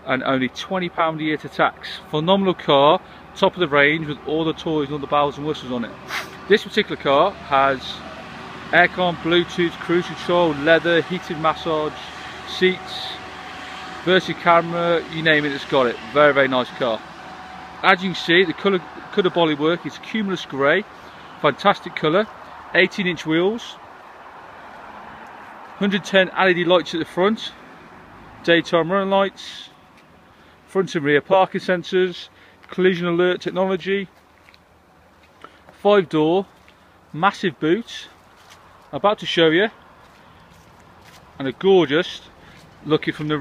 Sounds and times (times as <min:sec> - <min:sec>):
Speech: 0:00.0 - 0:13.2, 0:14.0 - 0:17.0, 0:17.8 - 0:23.8, 0:25.8 - 0:27.6, 0:28.4 - 0:29.8, 0:30.7 - 0:34.2, 0:35.8 - 0:36.5, 0:37.1 - 0:38.2, 0:38.9 - 0:39.8, 0:41.4 - 0:43.4.